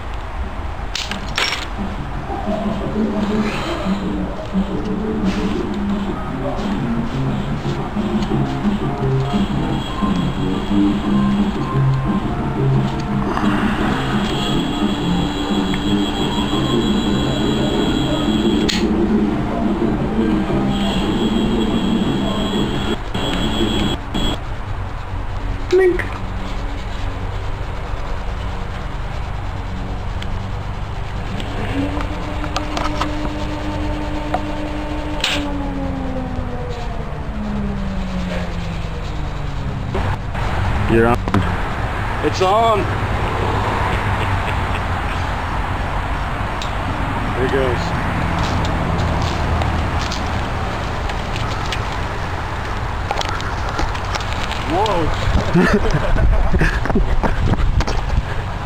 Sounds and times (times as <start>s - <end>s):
Bicycle: 0.0s - 42.0s, 45.5s - 58.6s.